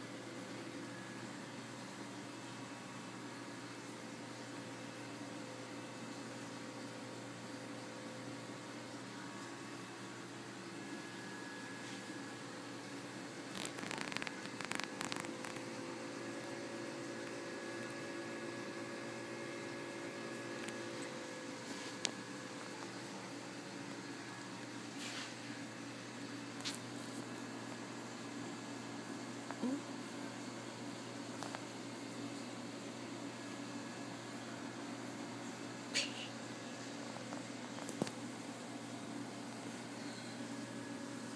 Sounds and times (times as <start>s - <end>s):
Microwave oven: 0.0s - 41.3s.